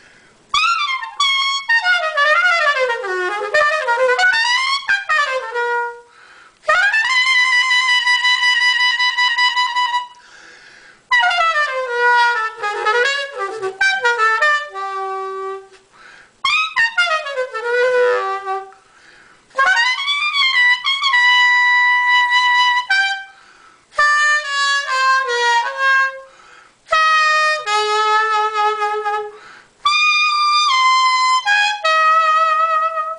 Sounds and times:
Music: 0:00.5 - 0:10.2, 0:11.1 - 0:15.8, 0:16.4 - 0:18.8, 0:19.5 - 0:26.3, 0:26.9 - 0:33.1.

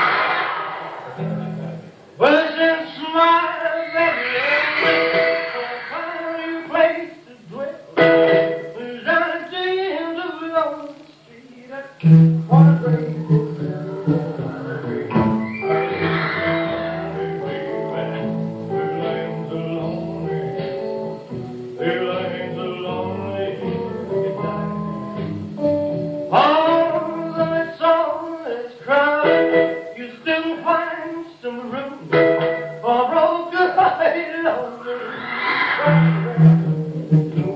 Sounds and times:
Television: 0:00.0 - 0:37.5
Music: 0:01.0 - 0:04.2, 0:04.8 - 0:37.5.

